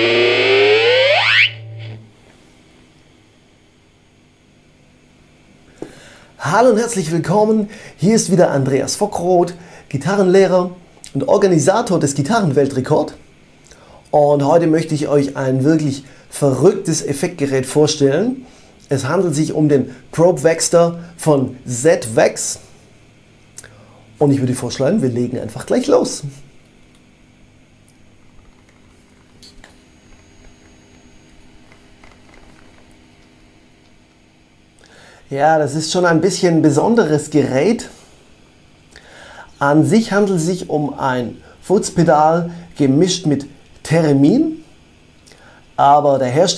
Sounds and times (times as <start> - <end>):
Speech: 6.4 - 13.3, 14.1 - 22.8, 23.6 - 26.5, 35.3 - 38.0, 39.6 - 44.8, 45.8 - 46.5.